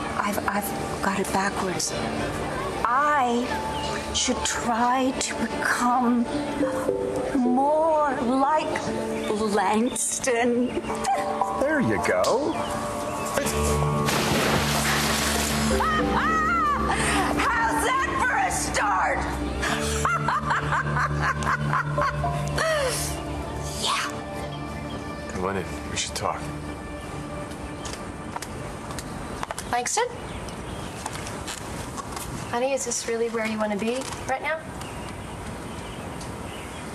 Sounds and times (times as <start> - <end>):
Music: 0.0 - 30.8.